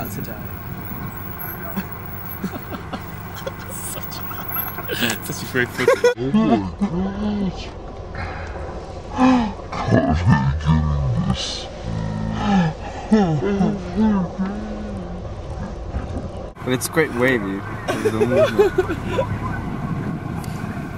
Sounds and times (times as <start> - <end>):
Outside, rural or natural: 0.0 - 20.9.